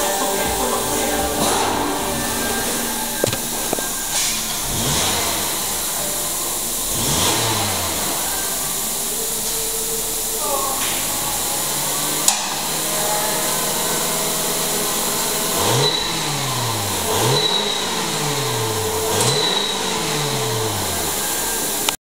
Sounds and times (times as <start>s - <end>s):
Car: 0.8s - 22.0s
Accelerating, revving, vroom: 6.8s - 8.3s, 11.9s - 21.3s.